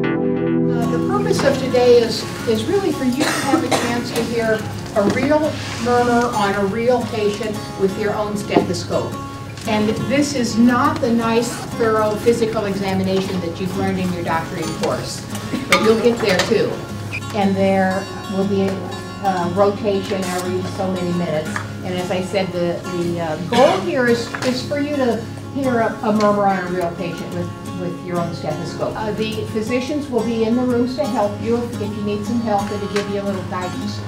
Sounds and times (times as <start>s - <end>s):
Music: 0.0s - 34.0s
Speech: 0.7s - 34.0s.